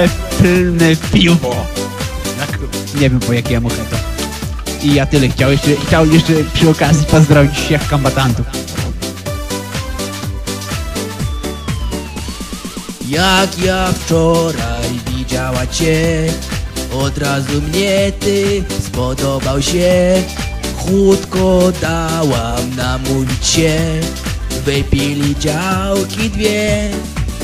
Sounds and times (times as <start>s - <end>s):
Music: 0.0s - 27.4s.